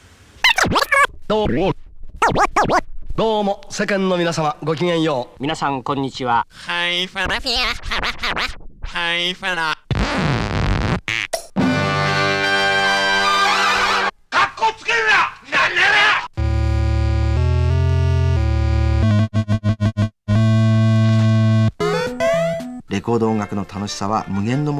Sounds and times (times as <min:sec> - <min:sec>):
Speech: 0:01.3 - 0:01.8, 0:03.2 - 0:07.8, 0:08.9 - 0:09.8, 0:14.3 - 0:16.3, 0:22.9 - 0:24.7
Music: 0:11.6 - 0:14.1, 0:16.4 - 0:24.7.